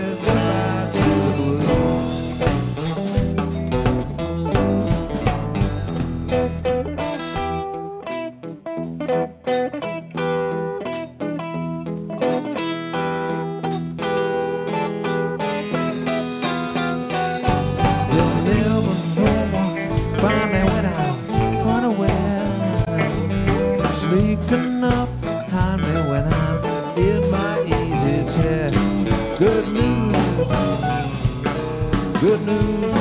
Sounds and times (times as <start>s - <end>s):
Guitar: 0.0s - 33.0s.